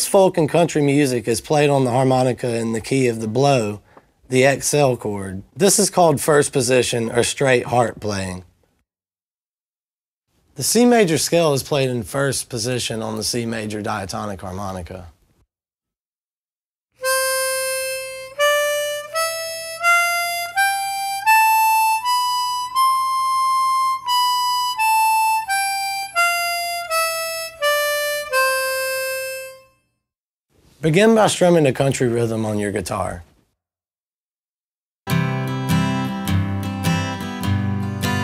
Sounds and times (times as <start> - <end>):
Speech: 0.0 - 8.5, 10.6 - 15.2, 30.8 - 33.3
Musical instrument: 17.0 - 29.8.